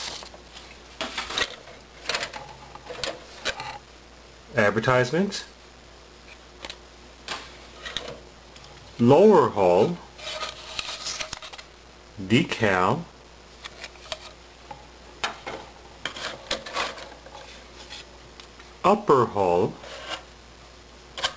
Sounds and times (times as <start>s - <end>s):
Speech: 4.5s - 5.6s, 9.0s - 10.1s, 12.2s - 13.1s, 18.8s - 19.8s.